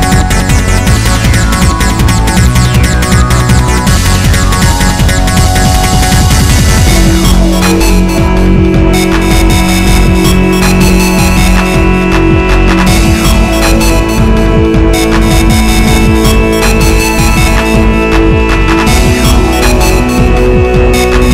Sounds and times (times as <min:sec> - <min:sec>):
Music: 0:00.0 - 0:21.3.